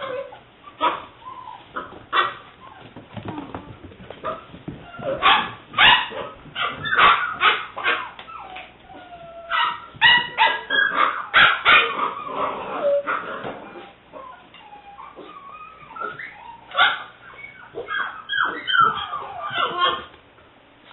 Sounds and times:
Canidae, dogs, wolves: 0.0s - 20.2s
Inside, small room: 0.0s - 20.9s
Bark: 2.1s - 2.4s, 5.0s - 8.2s, 9.5s - 12.2s, 16.0s - 17.1s, 17.8s - 20.1s.

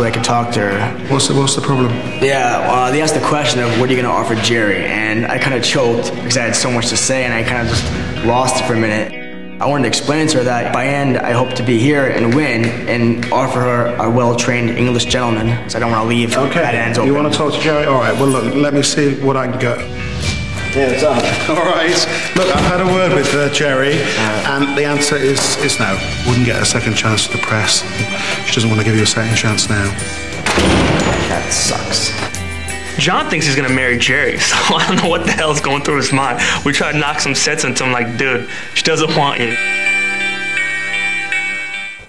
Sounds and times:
Speech: 0.0s - 19.8s, 20.7s - 27.9s, 28.5s - 30.0s, 33.0s - 39.6s
Music: 0.0s - 42.0s.

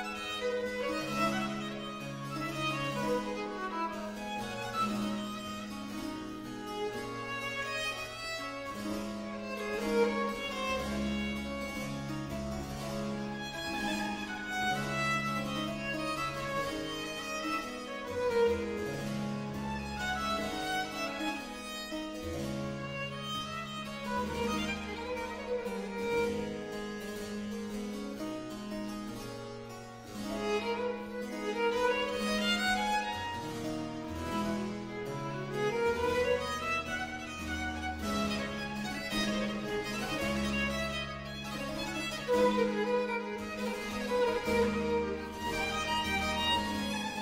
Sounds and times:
Violin, fiddle: 0.0s - 47.2s.

